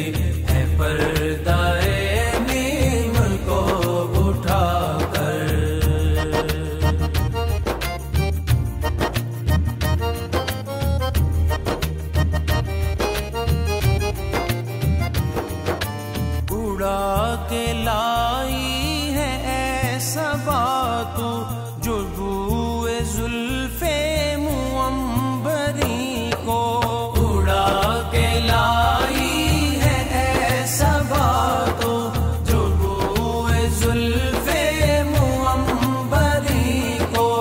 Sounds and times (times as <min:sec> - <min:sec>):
Music of Bollywood: 0:00.0 - 0:37.4.